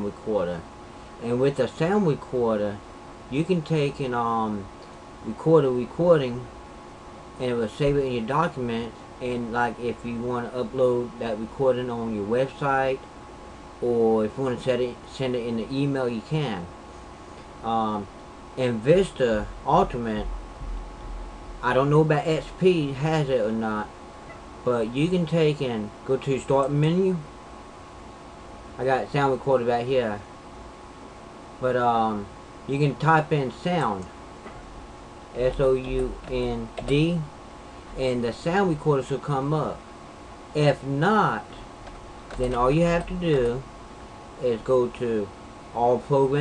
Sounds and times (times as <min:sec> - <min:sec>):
Speech: 0:00.0 - 0:06.5, 0:07.4 - 0:13.0, 0:13.8 - 0:16.7, 0:17.6 - 0:20.3, 0:21.6 - 0:23.9, 0:24.6 - 0:27.3, 0:28.8 - 0:30.3, 0:31.6 - 0:34.1, 0:35.4 - 0:37.3, 0:38.0 - 0:39.8, 0:40.6 - 0:41.6, 0:42.3 - 0:43.7, 0:44.4 - 0:46.4.